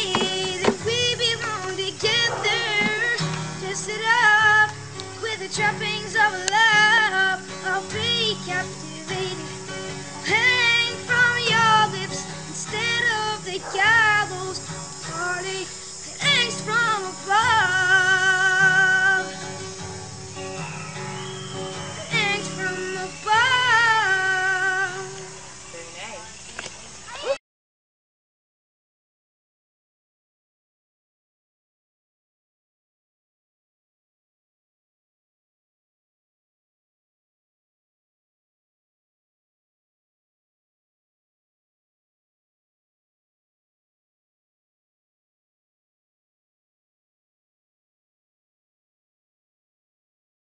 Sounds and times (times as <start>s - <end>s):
Child singing: 0.0s - 9.5s, 10.2s - 19.3s, 22.0s - 25.3s
Music: 0.0s - 25.7s.